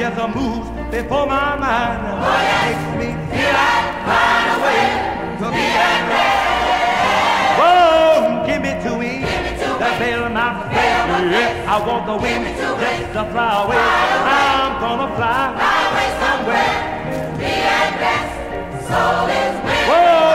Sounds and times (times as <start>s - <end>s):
Choir: 1.8s - 20.3s.